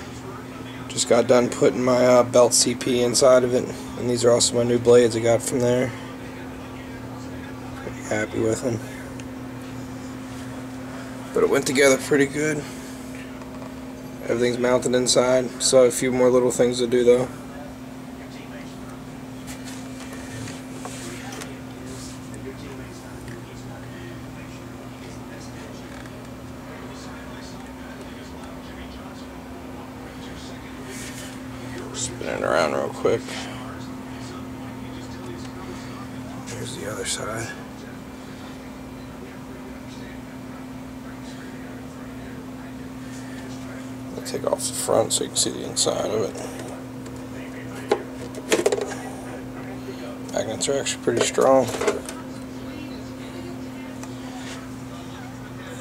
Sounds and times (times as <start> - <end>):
Speech: 0.0 - 13.4, 14.2 - 55.8.